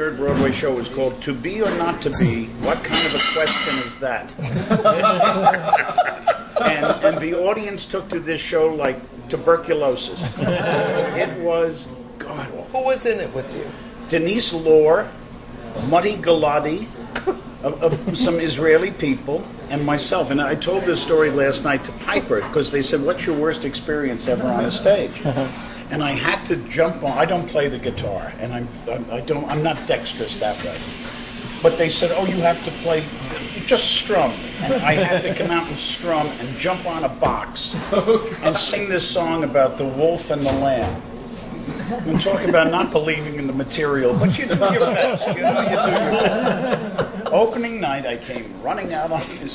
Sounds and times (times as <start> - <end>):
Speech: 0.0 - 4.4, 6.6 - 10.4, 11.0 - 17.0, 17.6 - 30.9, 31.6 - 41.0, 42.0 - 46.6, 47.2 - 49.5.